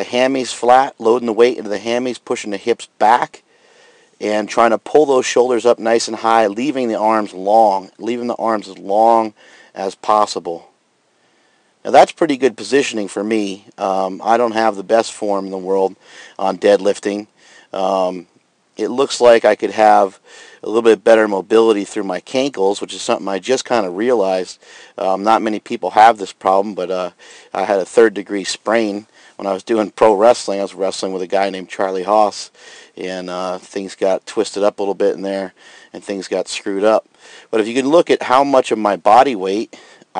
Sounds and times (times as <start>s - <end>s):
Speech: 0.0s - 3.4s, 4.2s - 10.7s, 11.8s - 40.2s.